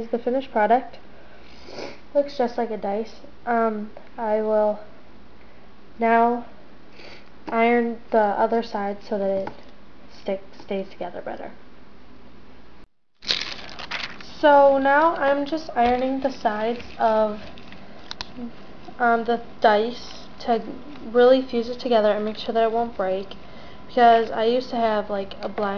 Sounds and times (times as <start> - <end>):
Speech: 0.0 - 1.0, 2.2 - 4.9, 6.0 - 6.5, 7.5 - 11.6, 14.3 - 17.5, 18.4 - 25.7
Crumpling, crinkling: 13.2 - 14.4, 15.0 - 18.3.